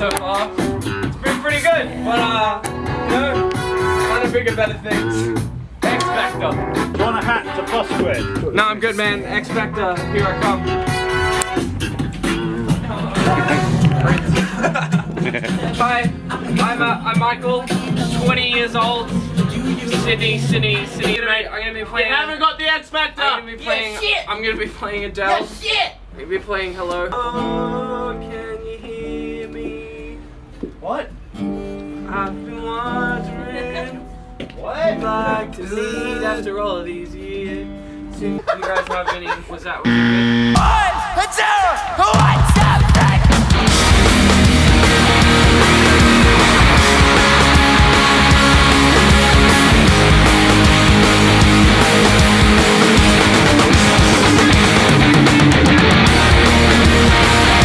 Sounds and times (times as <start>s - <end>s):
Music: 0.0s - 21.6s, 27.1s - 38.6s, 40.5s - 57.6s
Speech: 4.1s - 10.6s, 19.9s - 27.0s, 38.3s - 39.9s.